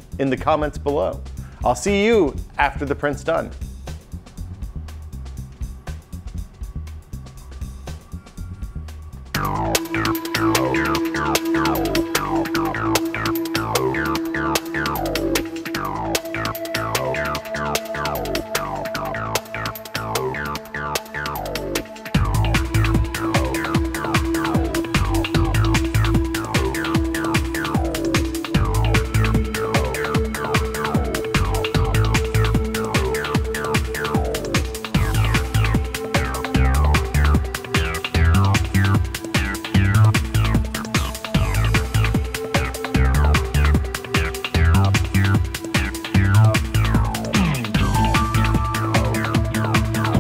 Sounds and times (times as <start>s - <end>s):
Speech: 0.2s - 3.6s
Electronica: 3.4s - 50.2s
Trance music: 3.6s - 50.2s.